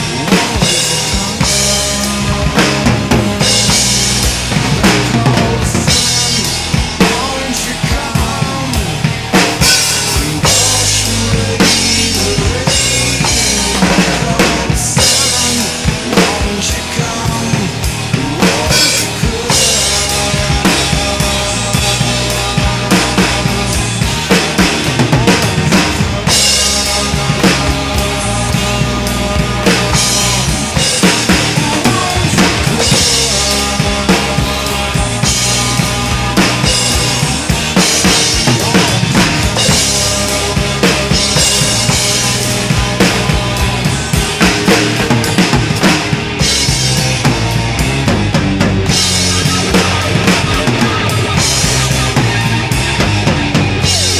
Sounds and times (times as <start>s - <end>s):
Bass drum: 0.0s - 54.1s
Drum kit: 0.0s - 54.1s.